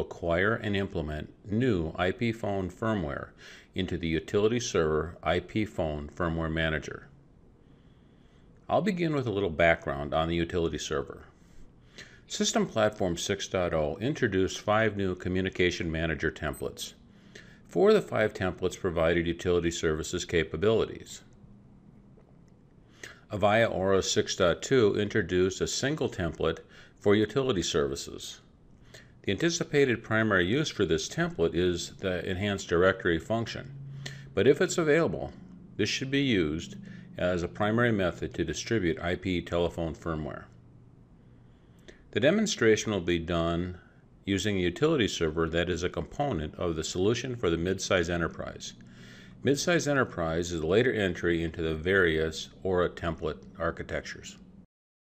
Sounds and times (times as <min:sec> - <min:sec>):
Speech: 0:00.0 - 0:07.2, 0:08.7 - 0:11.4, 0:12.3 - 0:17.0, 0:17.7 - 0:21.3, 0:23.3 - 0:28.5, 0:29.2 - 0:33.7, 0:34.4 - 0:40.6, 0:42.1 - 0:48.8, 0:49.4 - 0:54.4.